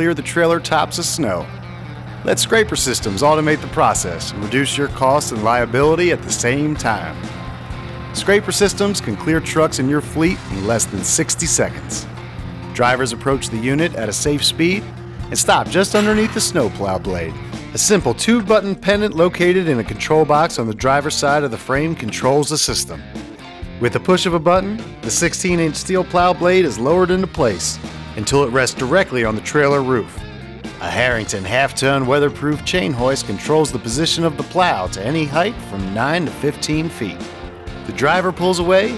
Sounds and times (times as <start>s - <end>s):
Speech: 0.0s - 1.5s, 2.3s - 7.2s, 8.2s - 12.1s, 12.8s - 23.0s, 23.8s - 30.2s, 30.8s - 37.2s, 37.9s - 38.9s
Music: 0.0s - 38.9s.